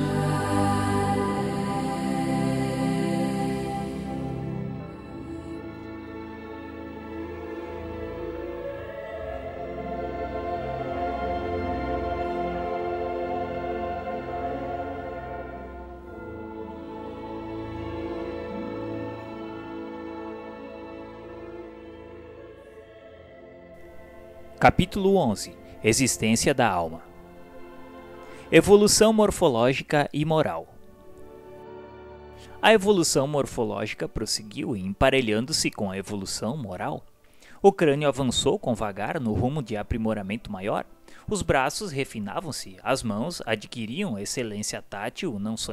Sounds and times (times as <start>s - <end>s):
Music: 0.0s - 45.7s
Speech: 24.6s - 27.0s, 28.5s - 30.7s, 32.6s - 37.0s, 37.6s - 45.7s.